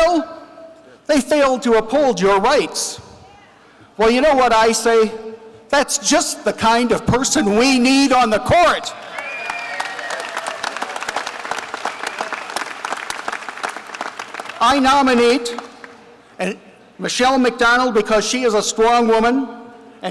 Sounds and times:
Male speech, man speaking: 0.0s - 0.3s, 1.1s - 3.1s, 4.0s - 8.9s, 14.6s - 15.6s, 16.4s - 20.1s
Narration, monologue: 0.0s - 9.0s, 14.5s - 20.1s.

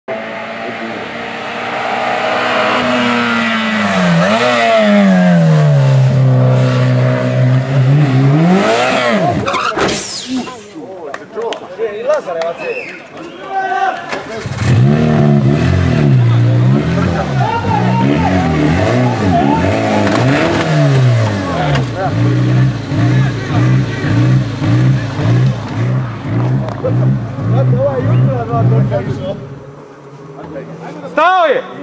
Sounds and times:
Race car, auto racing: 0.1s - 10.8s, 14.1s - 31.8s.

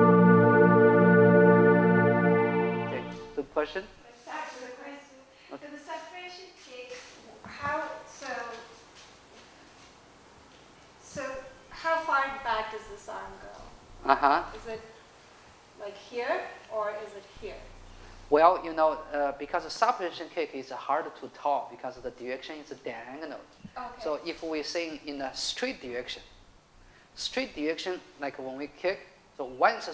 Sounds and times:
Speech: 2.9s - 8.8s, 11.0s - 15.0s, 15.8s - 17.7s, 18.3s - 26.2s, 27.2s - 29.9s.

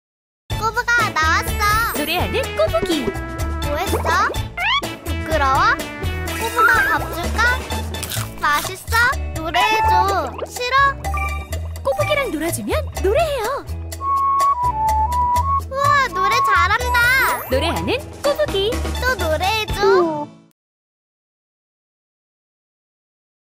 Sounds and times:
Music: 0.5s - 20.6s.

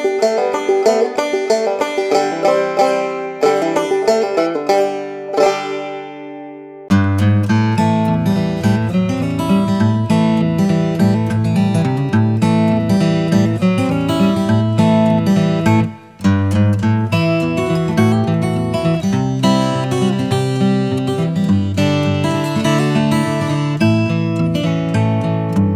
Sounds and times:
Banjo: 0.0s - 25.7s.

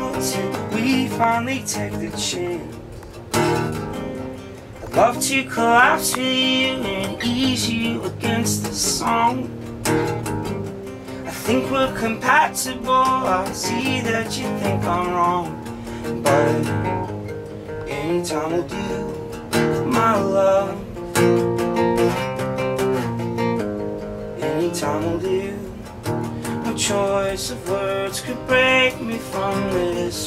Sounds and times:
Music: 0.0s - 30.2s.

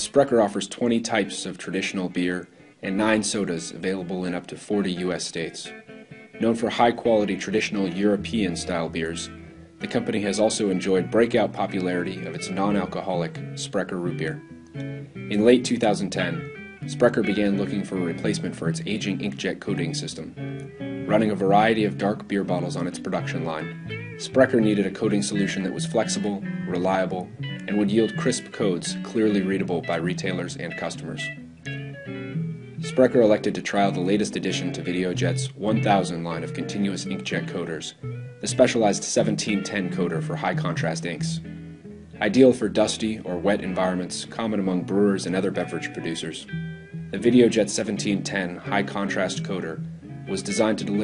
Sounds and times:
Speech: 0.0s - 5.8s, 6.4s - 14.4s, 15.3s - 20.4s, 21.1s - 31.4s, 32.8s - 41.4s, 42.2s - 46.5s, 47.1s - 51.0s
Music: 0.0s - 51.0s.

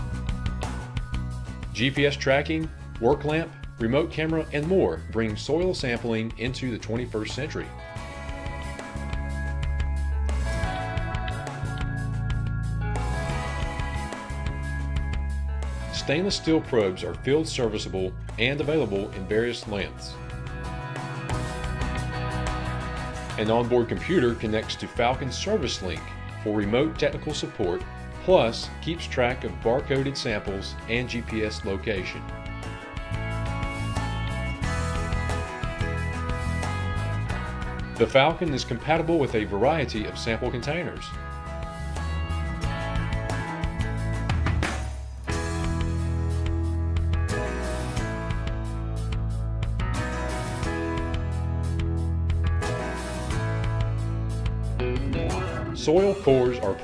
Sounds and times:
Music: 0.0s - 56.8s
Speech: 1.8s - 7.7s, 15.9s - 20.2s, 23.4s - 32.2s, 38.0s - 41.1s, 55.1s - 56.8s.

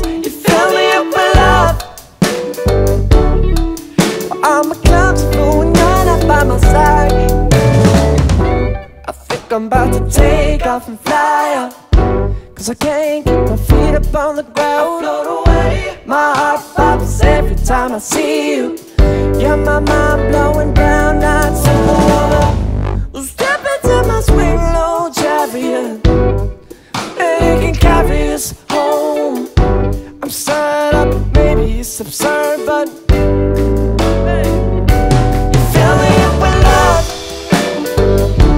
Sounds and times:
Musical instrument: 0.0s - 10.5s, 16.8s - 23.2s, 31.0s - 38.5s
Pop music: 0.0s - 38.5s.

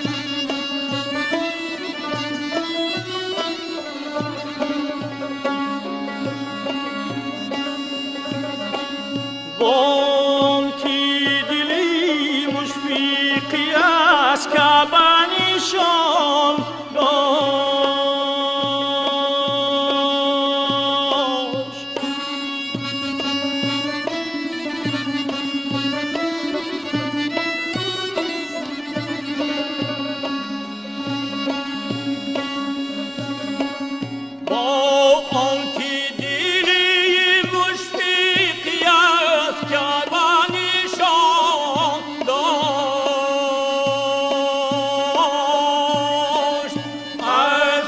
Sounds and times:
Traditional music: 0.0s - 47.8s.

